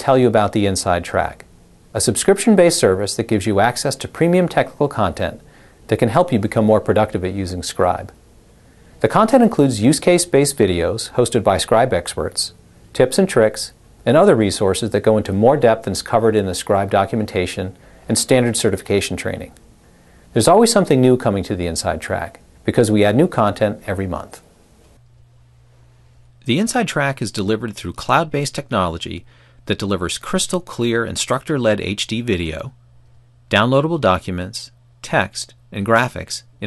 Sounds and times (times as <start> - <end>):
Speech: 0.0 - 8.2, 9.0 - 19.6, 20.3 - 24.5, 26.4 - 32.8, 33.5 - 36.6.